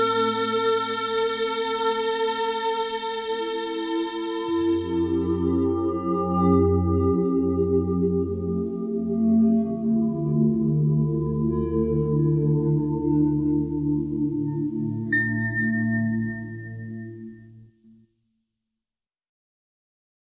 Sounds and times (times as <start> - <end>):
Music: 0.0 - 18.7.